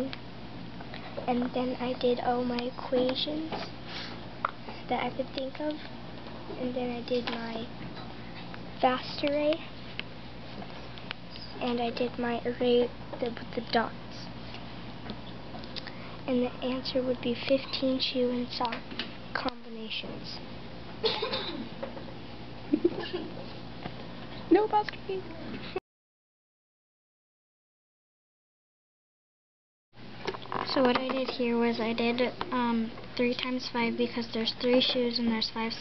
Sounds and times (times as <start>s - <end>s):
Speech: 1.3s - 3.7s, 4.8s - 5.9s, 6.6s - 7.7s, 8.8s - 9.7s, 11.4s - 14.3s, 16.3s - 18.8s, 19.4s - 20.4s, 24.5s - 25.8s, 30.6s - 35.8s.